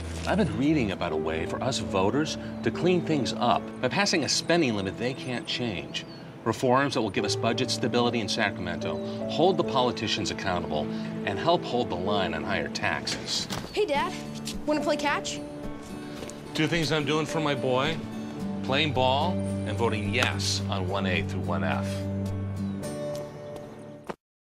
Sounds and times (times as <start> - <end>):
Music: 0.0 - 24.2.